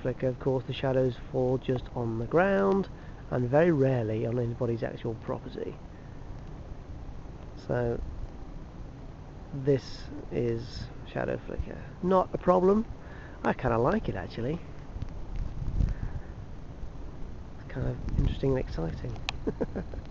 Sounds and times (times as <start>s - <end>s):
Speech: 0.0s - 5.8s, 7.6s - 8.0s, 9.6s - 14.6s, 17.6s - 19.2s.